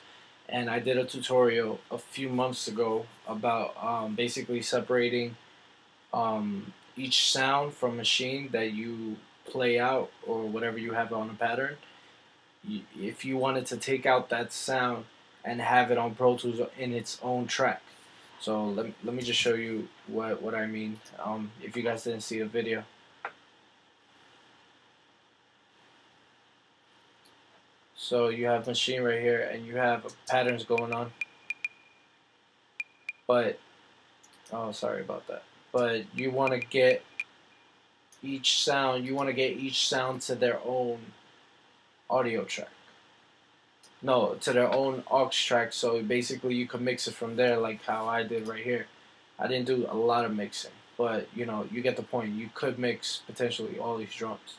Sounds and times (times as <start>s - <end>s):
Speech: 0.5s - 5.4s, 6.2s - 11.8s, 12.6s - 17.8s, 18.4s - 22.9s, 28.0s - 31.2s, 33.3s - 33.6s, 34.5s - 37.0s, 38.2s - 41.2s, 42.1s - 42.8s, 44.0s - 54.5s.